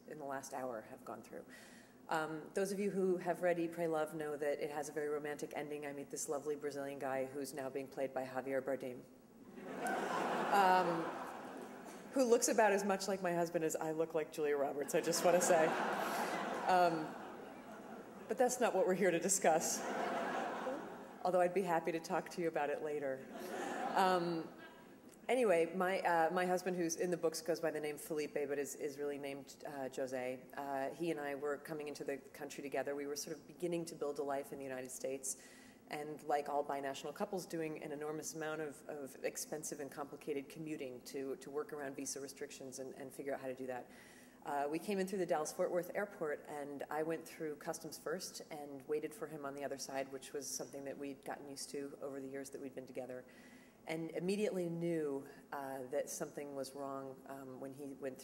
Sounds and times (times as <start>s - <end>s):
Female speech, woman speaking: 0.0s - 1.4s, 2.1s - 9.1s, 10.5s - 11.2s, 12.1s - 15.8s, 16.6s - 17.2s, 18.3s - 19.9s, 20.7s - 23.2s, 24.0s - 24.6s, 25.3s - 43.8s, 44.4s - 53.3s, 53.9s - 58.2s
Narration, monologue: 0.0s - 58.2s.